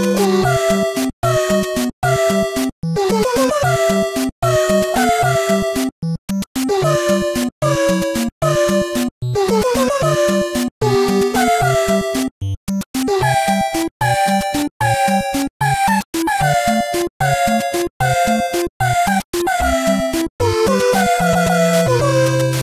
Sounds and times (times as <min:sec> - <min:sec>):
Music: 0:00.0 - 0:22.6.